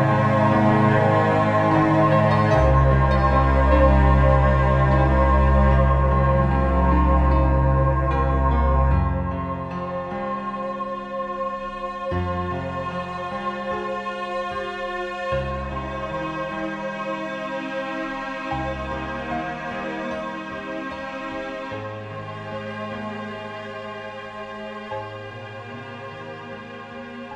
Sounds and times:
Cello: 0:00.0 - 0:27.3.

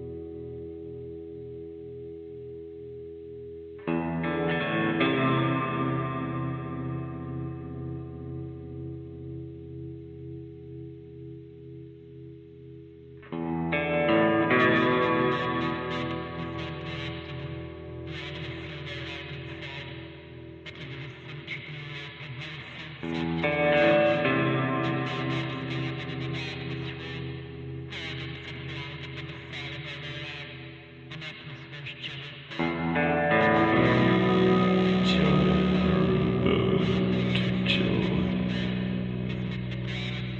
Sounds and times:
Music: 0:00.0 - 0:40.3
Speech: 0:33.4 - 0:39.5.

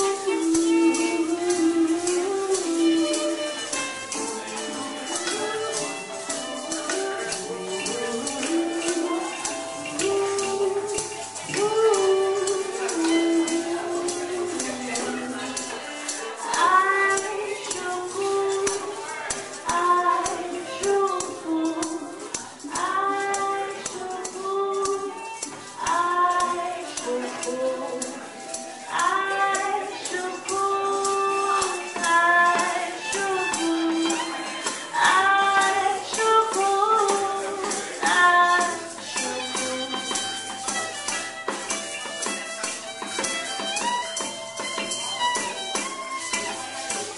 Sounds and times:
Singing: 0:00.0 - 0:40.8
Musical instrument: 0:00.0 - 0:47.1
Speech: 0:00.0 - 0:47.1.

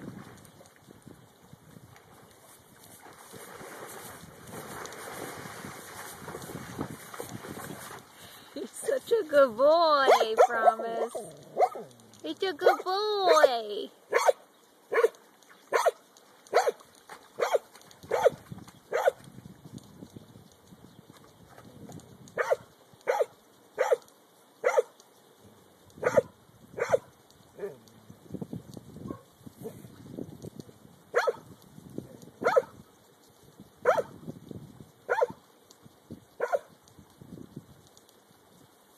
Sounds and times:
Speech: 0:08.6 - 0:11.3, 0:12.2 - 0:13.9.

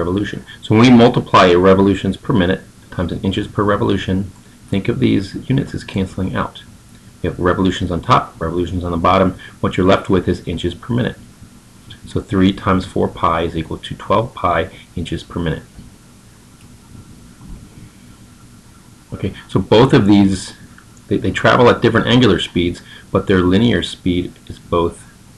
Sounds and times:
Speech: 0:00.0 - 0:11.2, 0:11.9 - 0:15.8, 0:19.1 - 0:25.2.

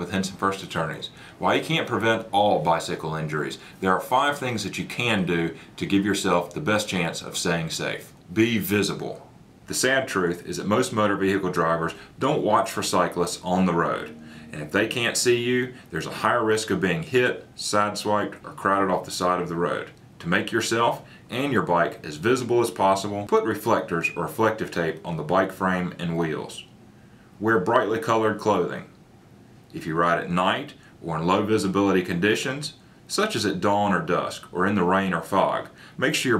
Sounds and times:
Speech: 0:00.0 - 0:26.7, 0:27.4 - 0:29.0, 0:29.7 - 0:36.3.

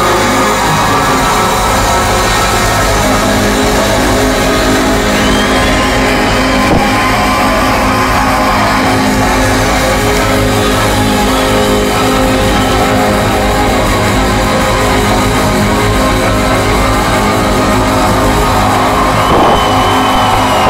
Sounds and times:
Music: 0:00.0 - 0:20.6.

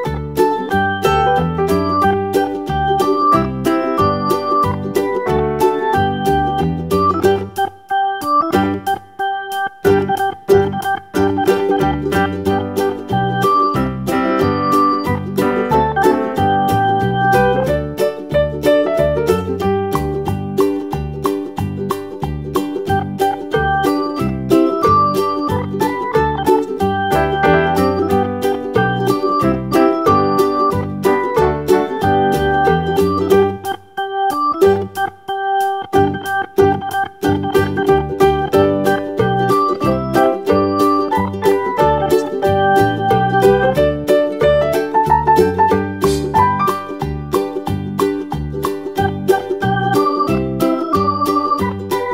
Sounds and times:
Piano: 0:00.0 - 0:52.1.

